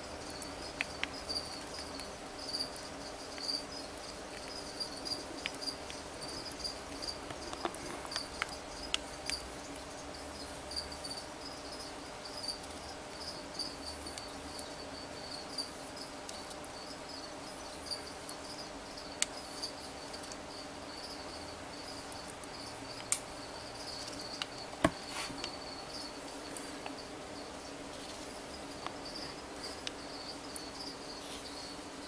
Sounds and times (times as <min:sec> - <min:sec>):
Snake: 0:00.0 - 0:32.0.